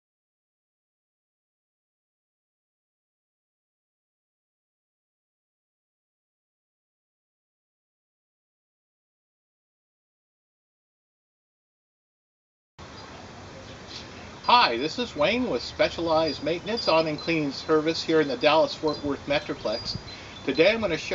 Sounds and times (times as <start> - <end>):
Speech: 13.4 - 21.1.